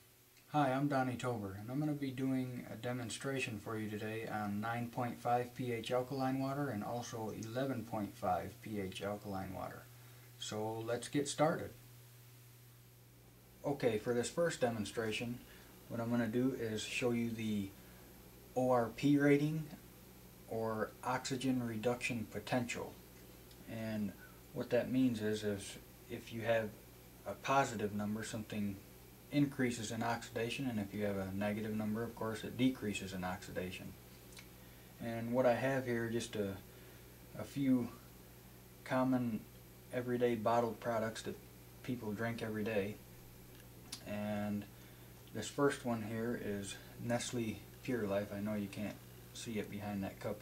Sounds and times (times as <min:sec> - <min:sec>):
Speech: 0:00.5 - 0:11.8, 0:13.6 - 0:17.8, 0:18.6 - 0:19.8, 0:20.5 - 0:23.0, 0:23.6 - 0:34.0, 0:35.0 - 0:36.7, 0:37.4 - 0:38.1, 0:38.8 - 0:43.1, 0:44.0 - 0:44.7, 0:45.3 - 0:50.4.